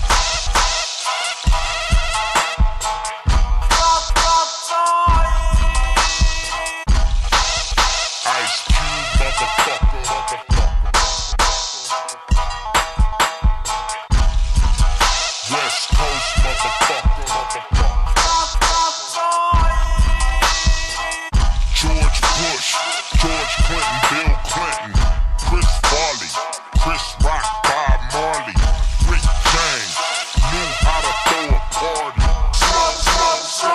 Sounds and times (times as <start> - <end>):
Music: 0.0 - 33.7.